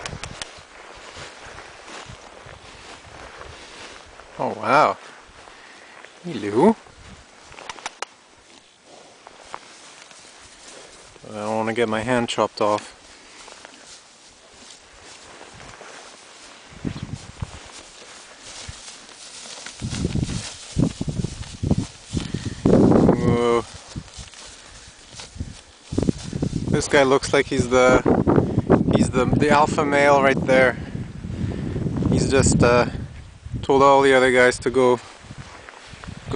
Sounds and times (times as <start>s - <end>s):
Speech: 4.4s - 5.0s, 6.2s - 6.8s, 11.2s - 13.0s, 23.2s - 23.7s, 26.7s - 28.0s, 28.9s - 30.8s, 32.1s - 33.0s, 33.6s - 35.0s.